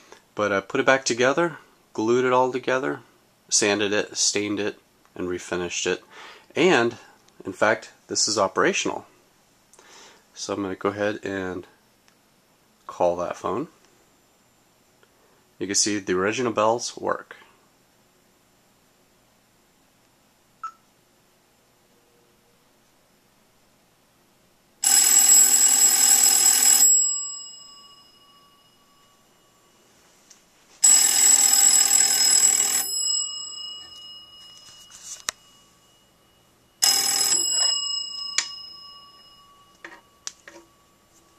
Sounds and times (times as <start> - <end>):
Telephone: 24.8 - 28.5, 30.8 - 36.0, 36.8 - 40.7.